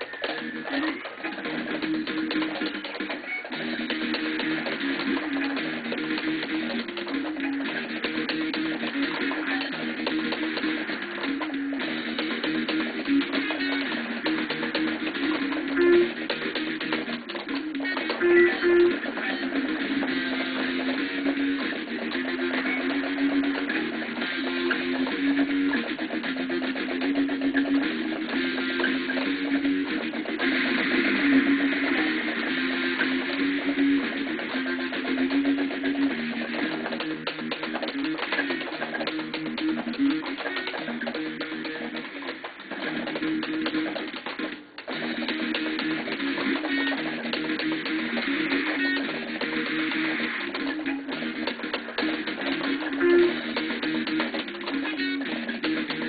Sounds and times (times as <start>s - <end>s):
Guitar: 0.0s - 56.0s.